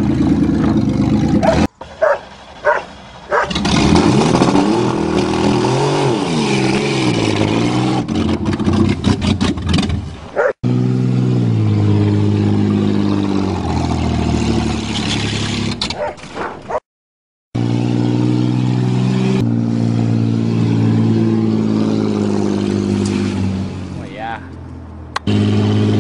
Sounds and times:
Car: 0:00.0 - 0:16.8, 0:17.6 - 0:26.0
Outside, rural or natural: 0:00.0 - 0:16.9, 0:17.5 - 0:26.0.

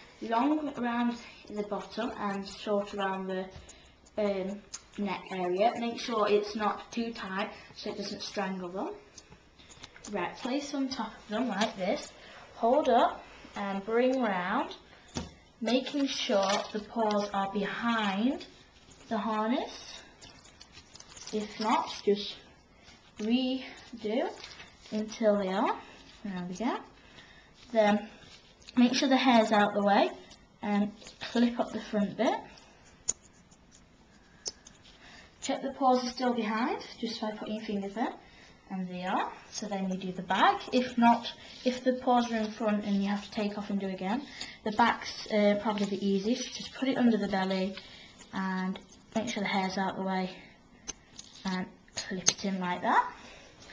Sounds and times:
Speech: 0:00.2 - 0:03.6, 0:04.2 - 0:09.0, 0:10.1 - 0:14.8, 0:15.6 - 0:18.5, 0:19.1 - 0:20.0, 0:21.3 - 0:22.5, 0:23.2 - 0:26.9, 0:27.7 - 0:28.1, 0:28.8 - 0:32.5, 0:35.4 - 0:50.4, 0:51.4 - 0:53.2.

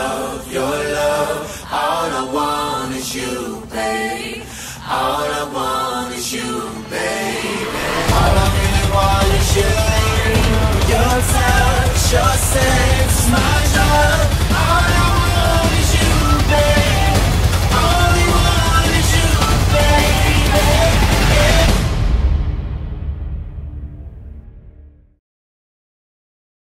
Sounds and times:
Soundtrack music: 0:06.6 - 0:25.1.

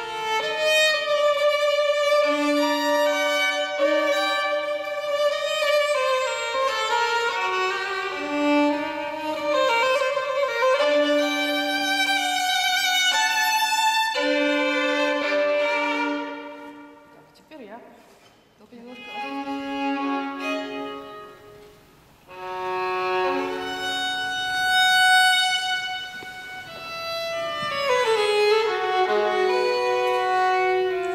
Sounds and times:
Violin, fiddle: 0:00.0 - 0:17.2, 0:18.7 - 0:31.1.

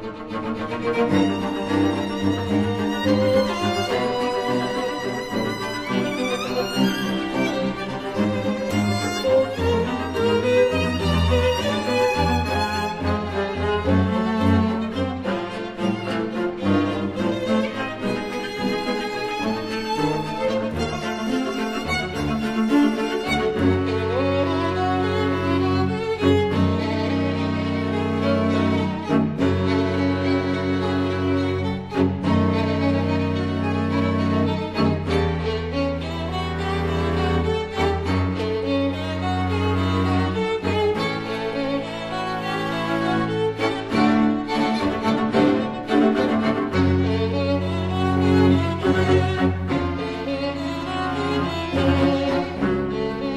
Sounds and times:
Bowed string instrument: 0:00.0 - 0:53.3.

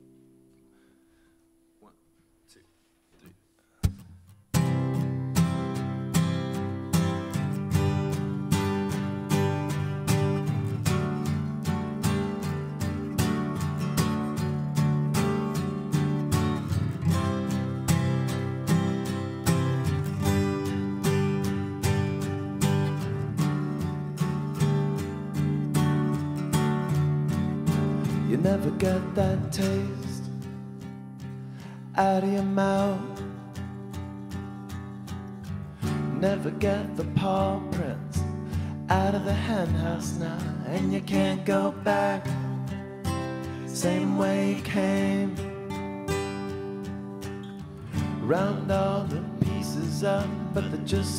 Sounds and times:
Music: 0:00.0 - 0:02.5, 0:03.8 - 0:51.1.

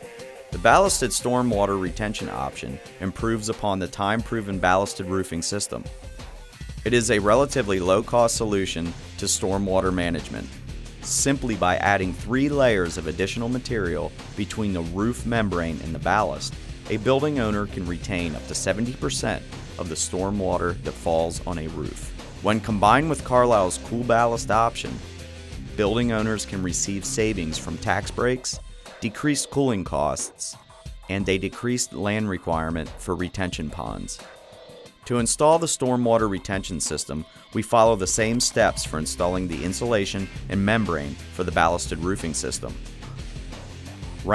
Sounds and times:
Music: 0:00.0 - 0:44.3
Speech: 0:00.6 - 0:05.9, 0:06.9 - 0:10.5, 0:11.1 - 0:25.0, 0:25.7 - 0:34.2, 0:35.1 - 0:42.8.

